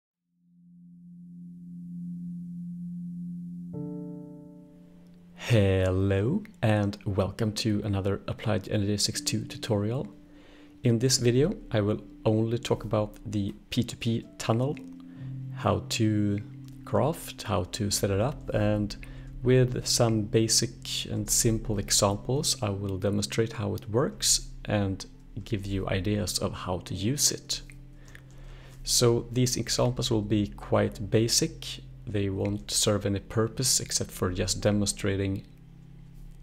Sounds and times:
Inside, small room: 0.3s - 36.4s
Music: 0.4s - 36.4s
Speech: 5.4s - 10.1s, 10.8s - 14.8s, 15.6s - 27.7s, 28.8s - 35.5s.

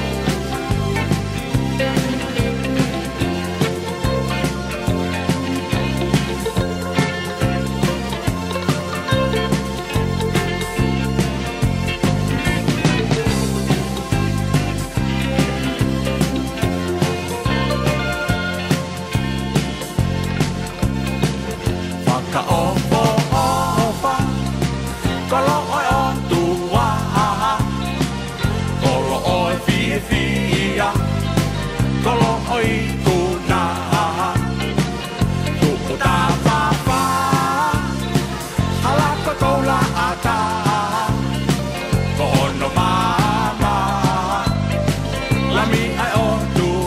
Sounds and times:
Music: 0.0s - 46.8s.

